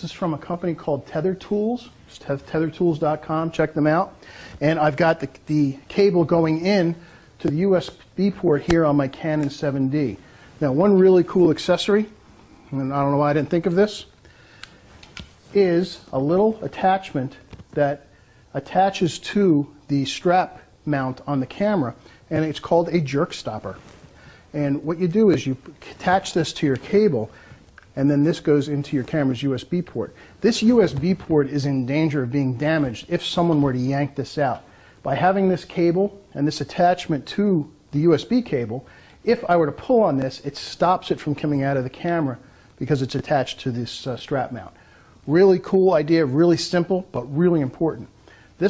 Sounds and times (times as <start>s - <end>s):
Speech: 0.0s - 14.1s, 15.5s - 23.8s, 24.5s - 27.4s, 28.0s - 48.6s.